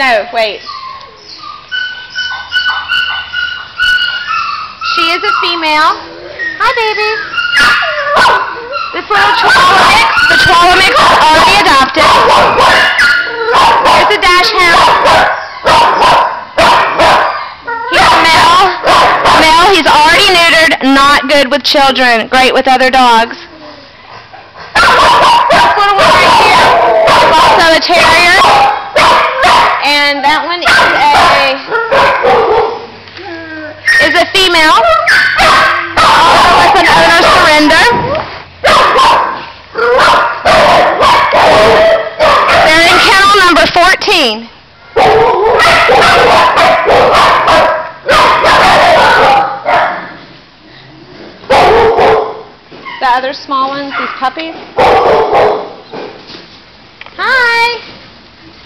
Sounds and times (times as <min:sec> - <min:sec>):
Dog: 0:00.7 - 0:19.7, 0:24.4 - 0:30.0, 0:30.6 - 0:32.8, 0:33.9 - 0:38.1, 0:38.7 - 0:43.1, 0:44.9 - 0:50.2, 0:51.4 - 0:53.2, 0:53.8 - 0:55.8.